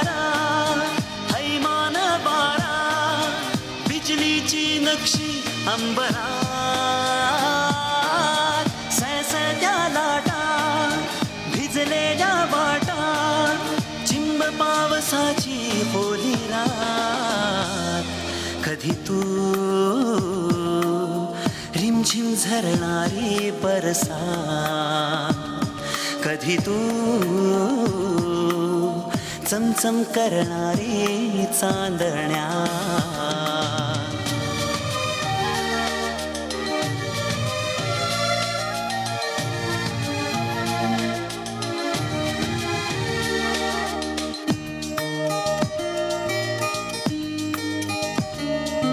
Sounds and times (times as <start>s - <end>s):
Singing: 0.0s - 37.0s
Music of Bollywood: 0.0s - 48.9s.